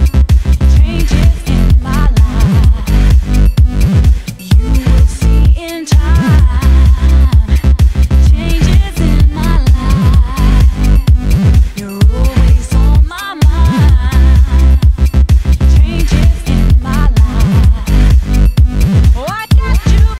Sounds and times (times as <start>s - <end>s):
Music: 0.0s - 20.1s.